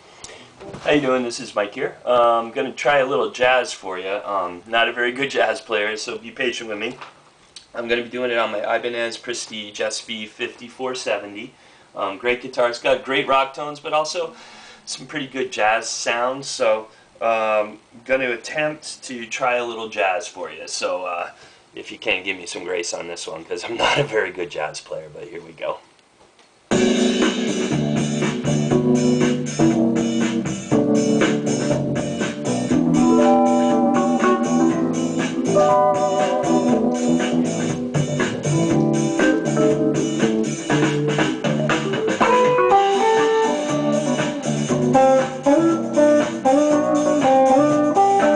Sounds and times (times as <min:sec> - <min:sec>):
Electric guitar: 0:26.7 - 0:48.3
Strum: 0:26.7 - 0:48.3.